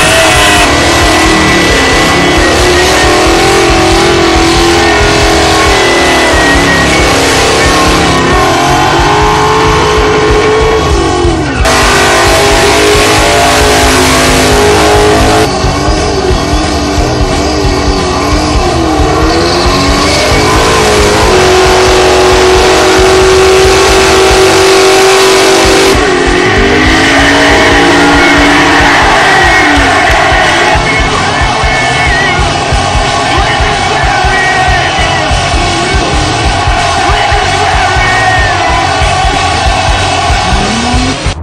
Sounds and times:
Music: 0.0s - 41.4s.

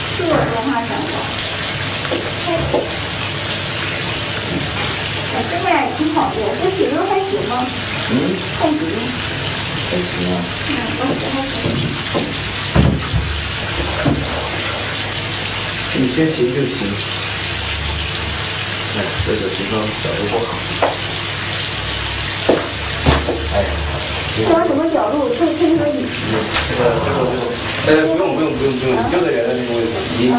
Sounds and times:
Speech: 5.4s - 9.1s, 9.9s - 11.6s, 16.0s - 17.0s, 19.0s - 20.6s, 24.4s - 30.3s.

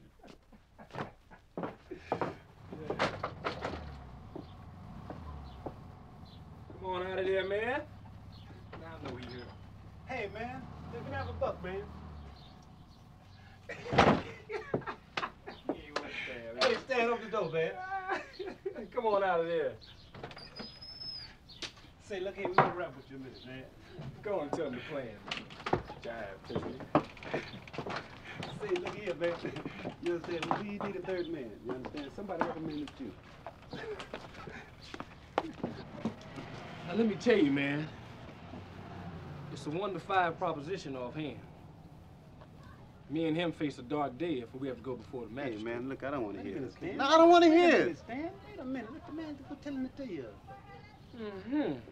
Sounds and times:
Speech: 8.8s - 9.5s, 10.1s - 11.9s.

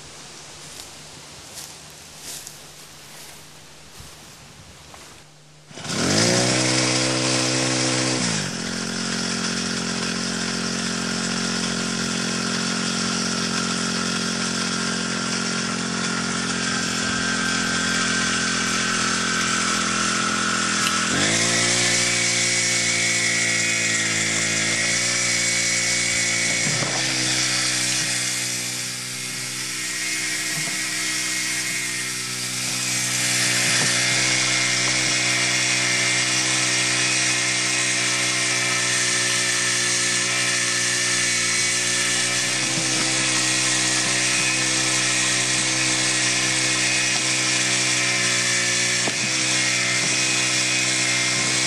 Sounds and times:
Chainsaw: 1.5s - 3.5s, 4.9s - 51.6s.

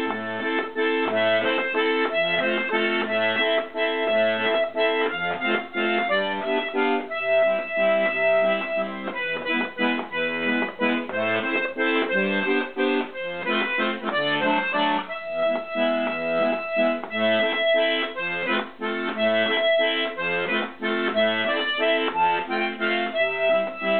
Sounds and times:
Accordion: 0.0s - 23.9s.

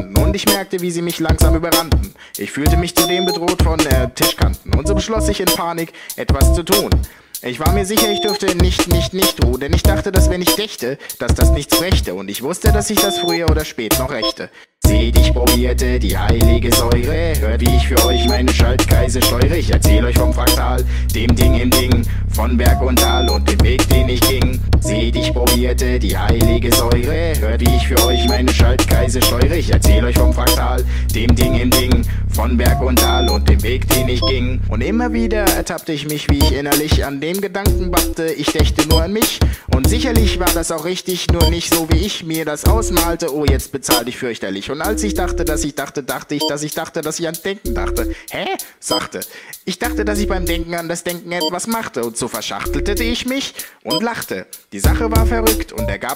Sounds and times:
Hip hop music: 0.0s - 51.8s, 52.7s - 56.1s.

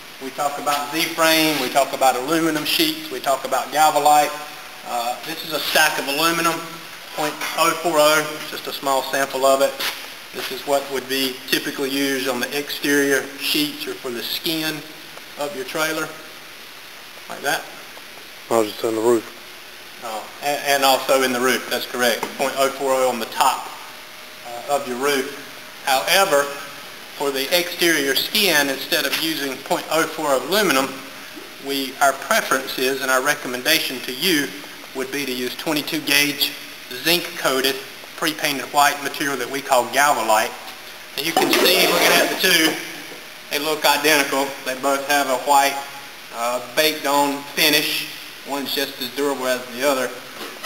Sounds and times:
Speech: 0.2s - 16.2s, 17.3s - 17.7s, 18.5s - 19.4s, 20.0s - 23.8s, 24.4s - 31.0s, 31.6s - 40.6s, 41.2s - 50.2s.

